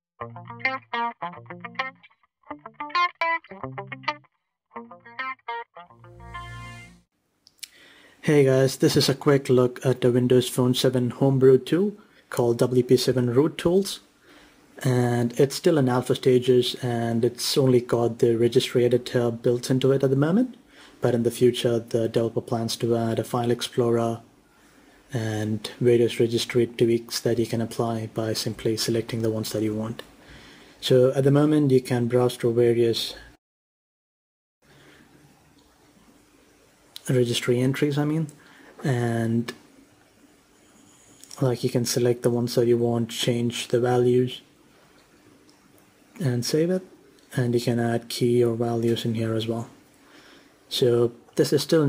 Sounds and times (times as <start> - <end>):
Speech: 8.2 - 14.0, 14.8 - 24.3, 25.1 - 30.1, 30.8 - 33.4, 37.0 - 39.6, 41.2 - 44.5, 46.2 - 49.8, 50.7 - 51.8.